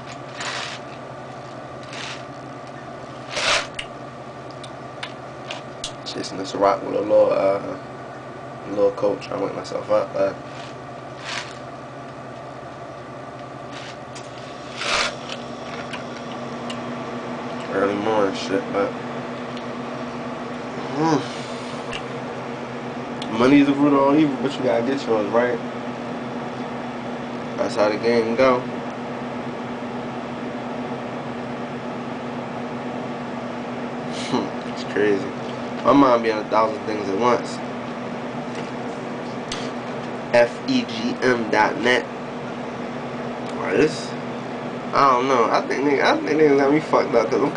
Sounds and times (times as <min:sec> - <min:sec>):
Speech: 0:06.0 - 0:07.8, 0:08.6 - 0:10.4, 0:17.7 - 0:19.0, 0:23.2 - 0:25.6, 0:27.6 - 0:28.7, 0:34.2 - 0:37.6, 0:40.3 - 0:42.1, 0:43.5 - 0:44.2, 0:44.9 - 0:47.5.